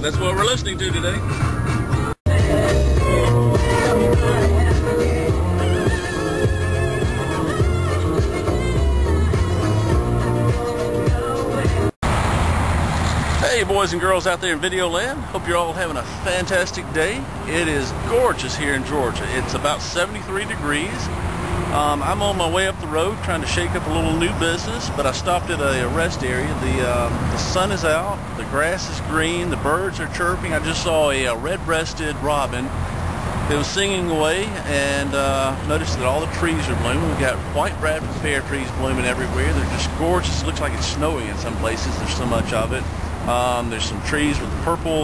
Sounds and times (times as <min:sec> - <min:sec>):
Speech: 0:00.0 - 0:01.4, 0:13.4 - 0:21.1, 0:21.7 - 0:32.7, 0:33.5 - 0:45.0.